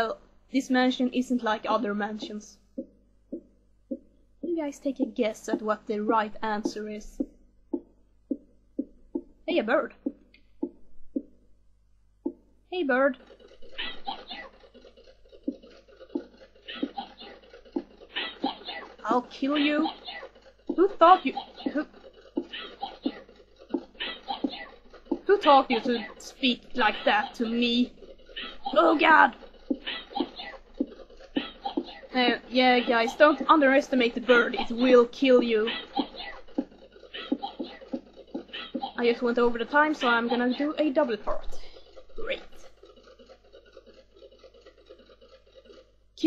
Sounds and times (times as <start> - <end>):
Speech: 0.0 - 2.6, 4.5 - 7.2, 9.5 - 10.0, 12.7 - 13.2, 19.0 - 20.0, 20.8 - 21.8, 25.3 - 27.9, 28.7 - 29.4, 32.1 - 35.8, 39.0 - 42.6.